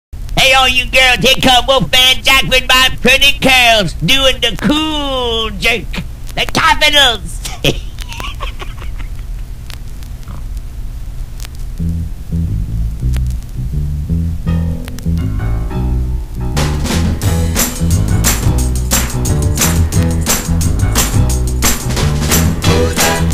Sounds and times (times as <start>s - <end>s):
Speech: 0.4s - 7.5s.